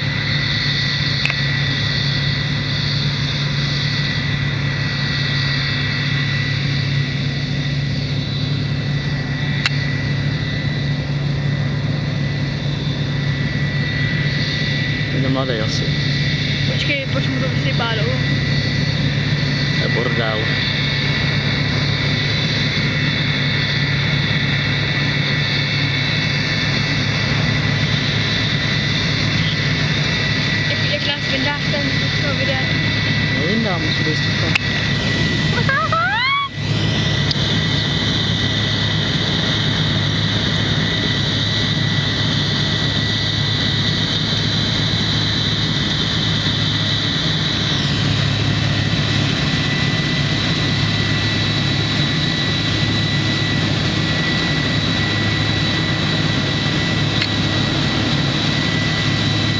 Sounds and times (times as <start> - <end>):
Outside, rural or natural: 0.0 - 59.5
Vehicle: 13.8 - 51.9.